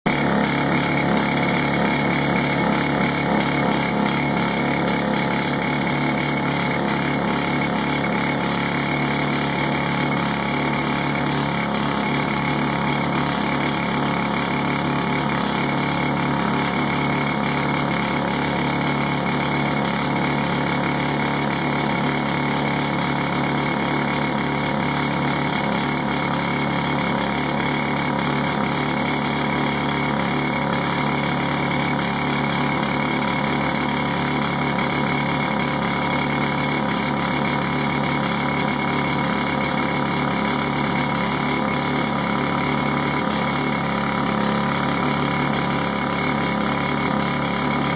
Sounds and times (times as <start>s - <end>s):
Jackhammer: 0.1s - 47.9s.